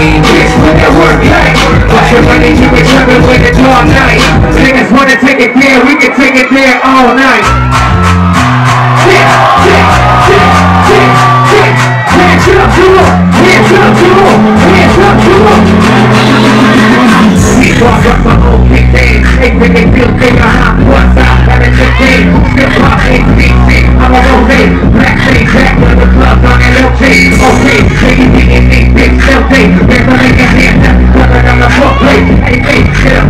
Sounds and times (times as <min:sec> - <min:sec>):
Music: 0:00.0 - 0:33.2.